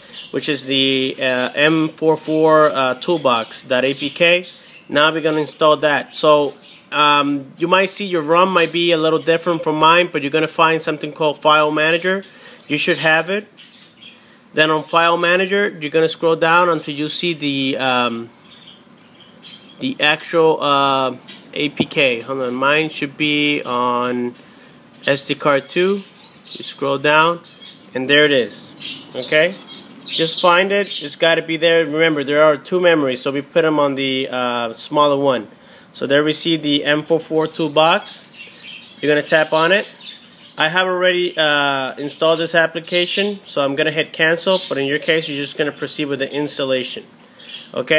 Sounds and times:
Chirp, tweet: 6.4s - 6.9s, 13.6s - 15.6s, 18.4s - 19.9s, 25.0s - 28.0s, 28.6s - 31.1s, 37.5s - 40.7s, 44.4s - 45.9s, 47.2s - 47.8s.

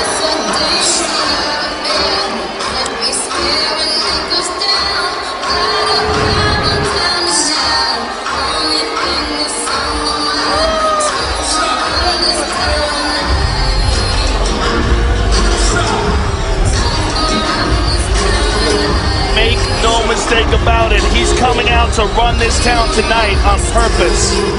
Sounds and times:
Music: 0.0s - 24.5s
Speech: 19.4s - 24.4s.

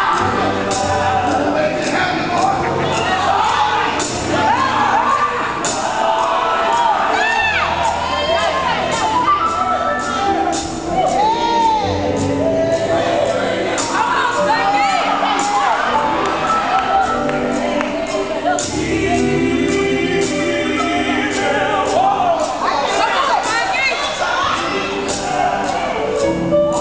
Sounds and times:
Music: 0.0s - 26.8s.

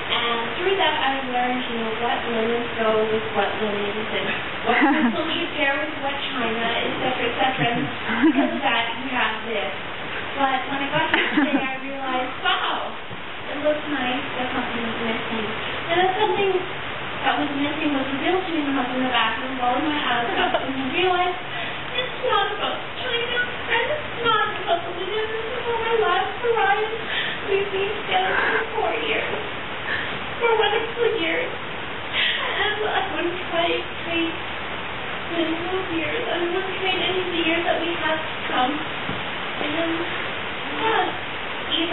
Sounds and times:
Female speech, woman speaking: 0.0s - 29.5s, 30.4s - 31.6s, 32.3s - 34.4s, 35.3s - 38.9s, 39.6s - 41.9s.

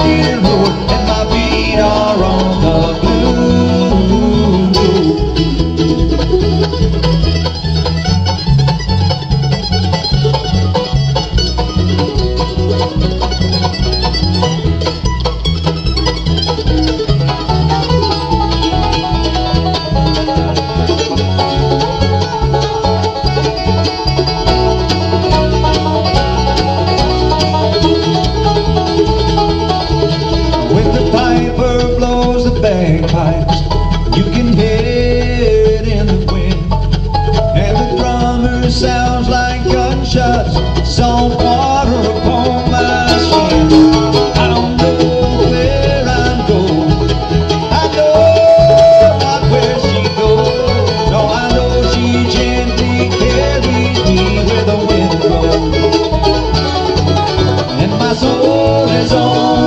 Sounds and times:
Guitar: 0.0s - 59.6s.

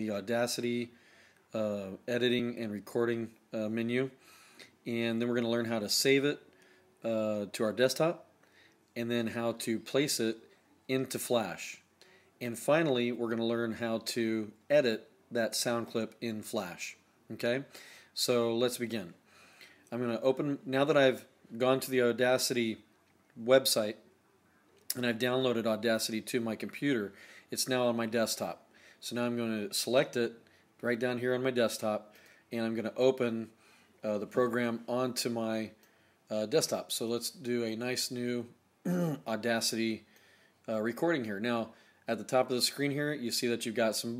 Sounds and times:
Speech: 0.0s - 4.2s, 4.8s - 8.3s, 9.0s - 19.2s, 19.9s - 24.0s, 24.9s - 40.1s, 40.7s - 44.2s.

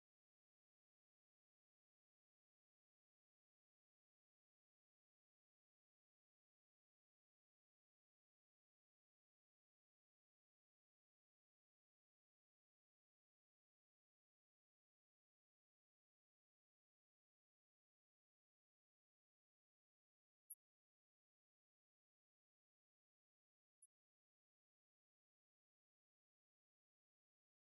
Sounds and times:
Music: 0.0s - 27.7s.

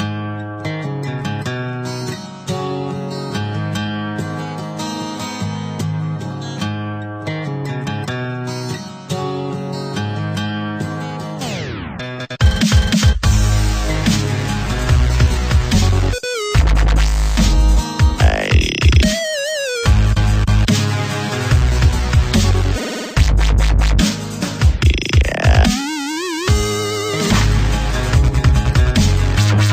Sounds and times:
Music: 0.0s - 29.7s.

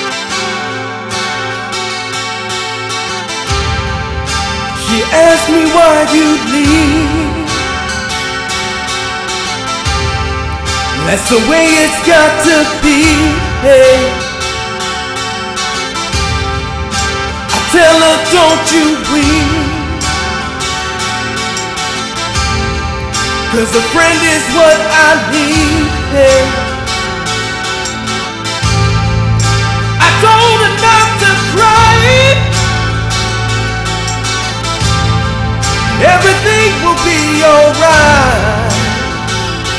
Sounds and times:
Music: 0.0s - 39.7s.

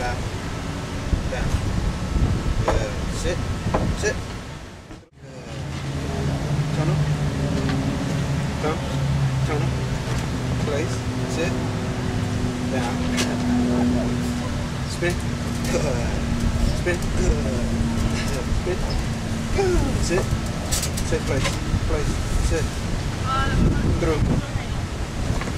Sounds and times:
Speech: 0.0s - 0.2s, 1.3s - 1.6s, 2.6s - 3.4s, 4.0s - 4.2s, 5.2s - 5.7s, 8.6s - 9.8s, 10.7s - 11.6s, 12.7s - 19.0s, 19.6s - 20.3s, 21.0s - 24.8s.

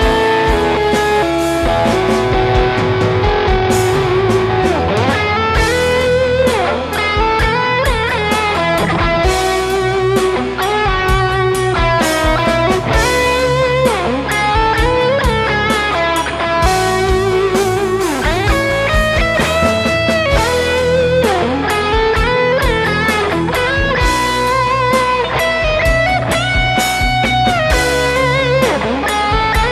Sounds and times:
Electric guitar: 0.0s - 29.7s
Strum: 0.0s - 29.7s.

